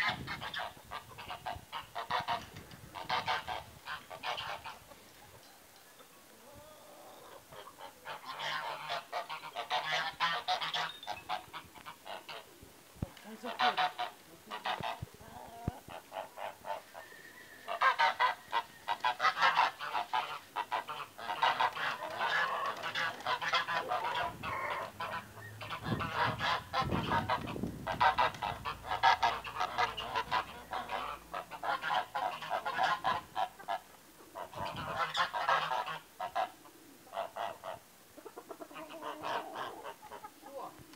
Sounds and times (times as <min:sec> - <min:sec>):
Outside, rural or natural: 0:00.0 - 0:40.9.